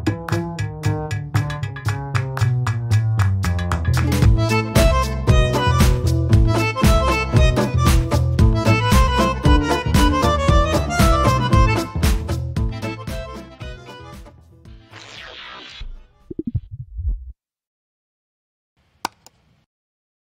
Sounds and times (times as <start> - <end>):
Music: 0.0 - 16.5.